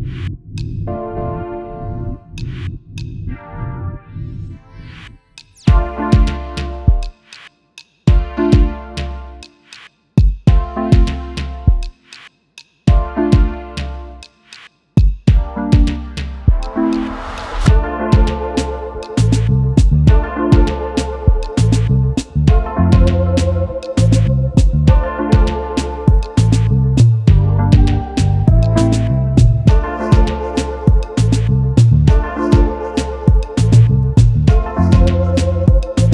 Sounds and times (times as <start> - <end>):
Music: 0.0 - 36.1.